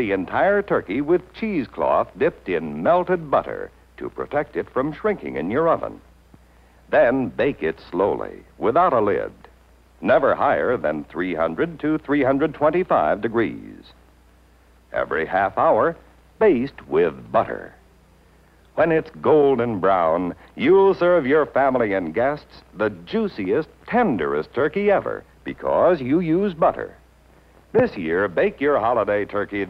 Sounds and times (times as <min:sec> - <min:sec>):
Speech: 0:00.0 - 0:06.1, 0:06.9 - 0:14.0, 0:14.9 - 0:17.8, 0:18.7 - 0:27.0, 0:27.7 - 0:29.7.